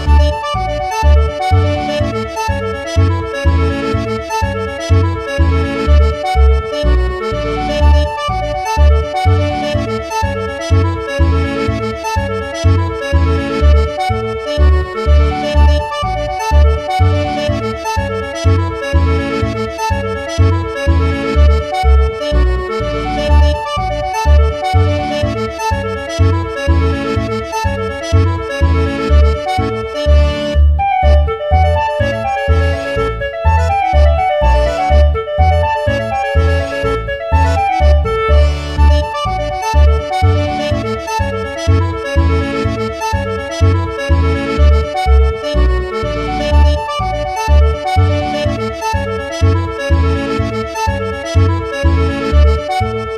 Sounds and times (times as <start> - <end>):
Music: 0.0 - 53.1.